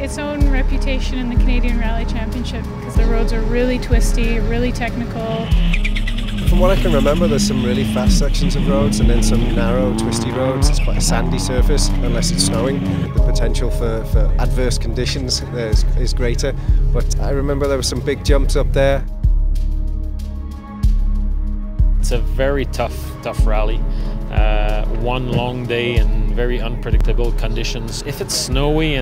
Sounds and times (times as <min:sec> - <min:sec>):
Music: 0:00.0 - 0:29.0
Speech: 0:06.4 - 0:19.0, 0:22.0 - 0:29.0.